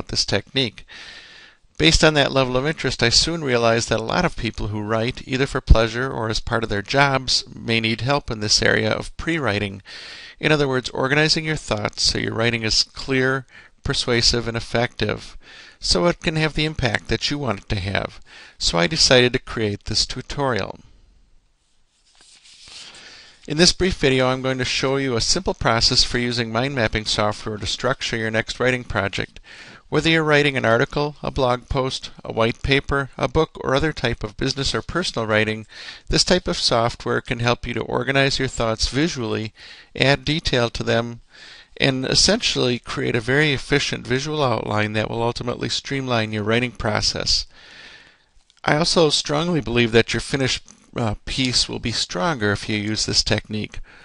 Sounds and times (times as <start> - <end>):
Speech: 0.0 - 0.9, 1.8 - 20.9, 23.5 - 47.5, 48.6 - 53.9.